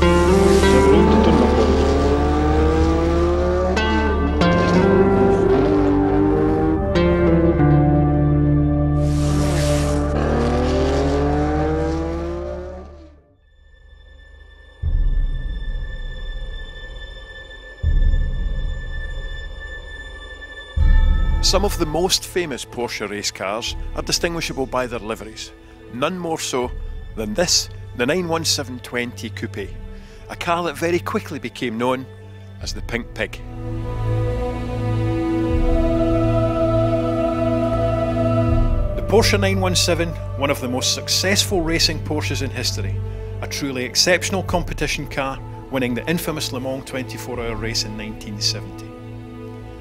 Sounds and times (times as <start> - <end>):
Music: 0.0 - 49.8
Speech: 0.7 - 1.7, 21.4 - 33.4, 39.0 - 48.9.